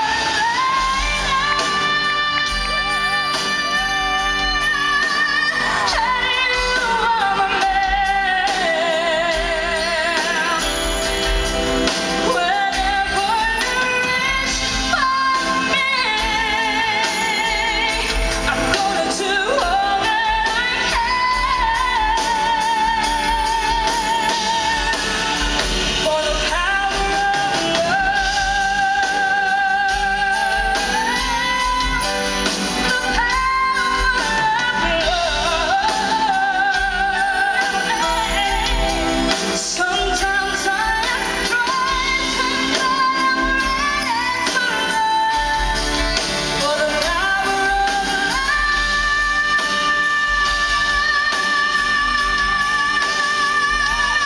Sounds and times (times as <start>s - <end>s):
Female singing: 0.0s - 54.2s
Music: 0.0s - 54.2s.